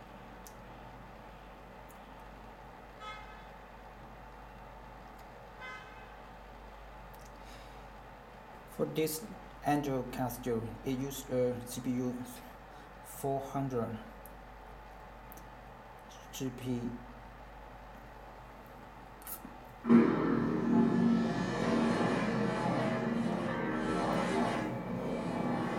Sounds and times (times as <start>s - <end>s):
Speech: 8.7s - 12.5s, 13.1s - 14.2s, 16.1s - 17.1s.